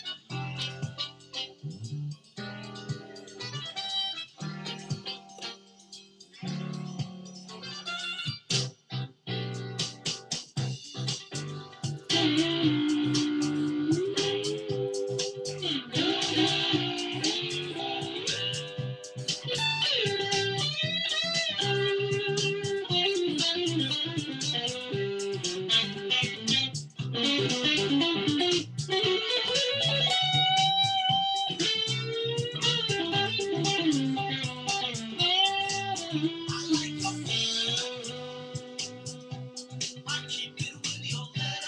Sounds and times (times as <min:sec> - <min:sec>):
Electric guitar: 0:00.0 - 0:41.6.